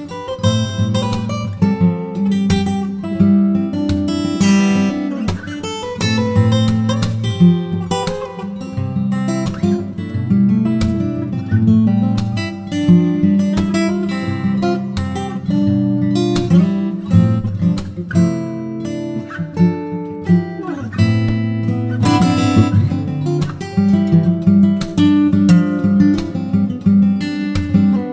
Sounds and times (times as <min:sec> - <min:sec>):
Electric guitar: 0:00.0 - 0:28.1.